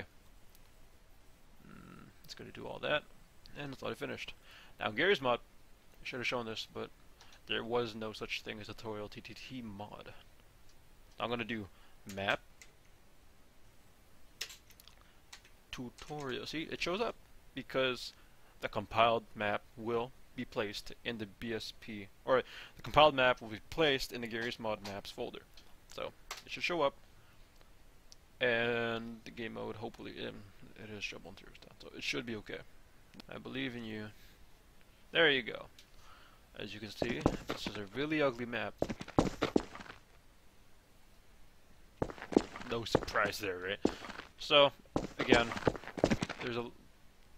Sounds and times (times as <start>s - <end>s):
Speech: 1.6s - 5.4s, 6.0s - 6.9s, 7.5s - 10.3s, 11.2s - 12.4s, 15.7s - 27.0s, 28.4s - 34.2s, 35.1s - 35.7s, 36.6s - 38.8s, 42.5s - 45.7s, 46.3s - 46.8s.